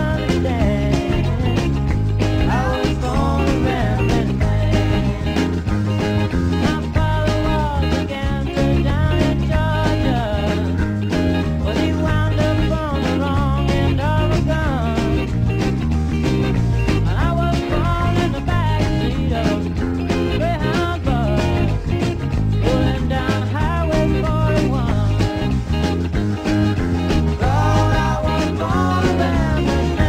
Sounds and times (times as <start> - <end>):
Guitar: 0.0 - 30.0.